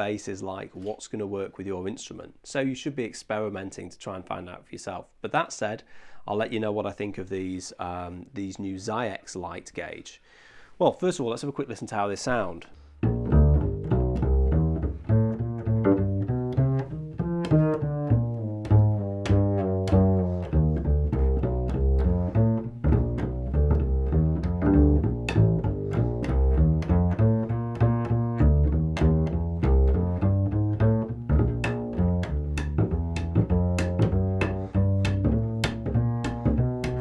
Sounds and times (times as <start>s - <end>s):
Speech: 0.0s - 10.2s, 10.8s - 12.8s
Double bass: 12.8s - 37.0s
Classical music: 13.0s - 37.0s.